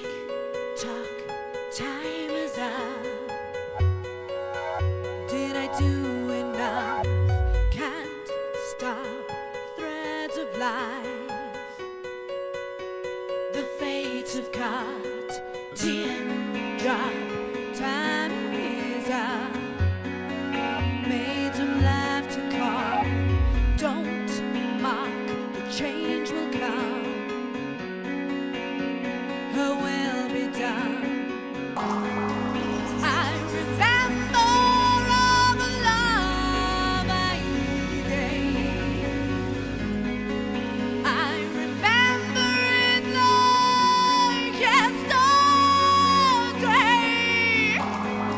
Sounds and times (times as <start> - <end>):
Music: 0.0 - 48.3.